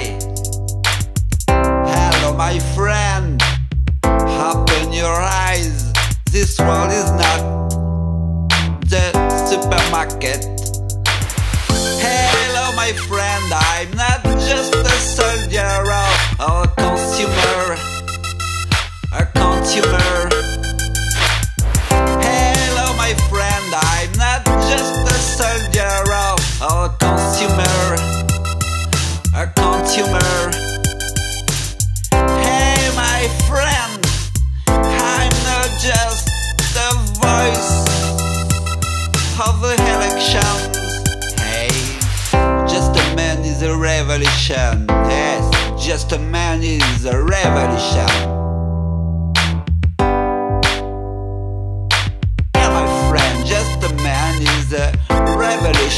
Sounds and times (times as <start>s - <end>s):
Electronic music: 0.0s - 3.0s, 4.0s - 43.6s, 44.9s - 46.2s, 47.4s - 55.9s.